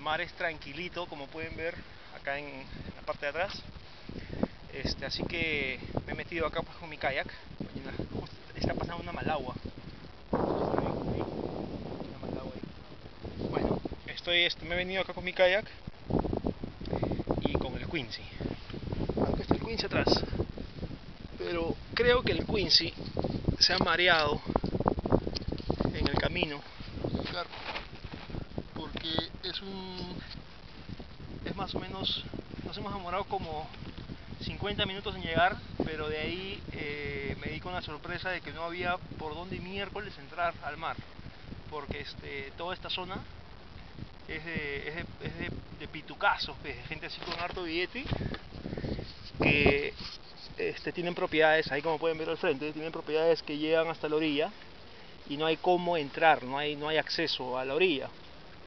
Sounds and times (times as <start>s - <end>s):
Speech: 0.0s - 3.6s, 4.7s - 9.6s, 13.4s - 15.7s, 17.4s - 18.4s, 19.2s - 20.3s, 21.4s - 23.0s, 23.6s - 24.4s, 25.9s - 26.6s, 28.8s - 30.3s, 31.4s - 33.8s, 34.4s - 41.0s, 41.7s - 43.2s, 44.3s - 48.1s, 49.4s - 50.0s, 50.6s - 54.6s, 55.3s - 58.1s.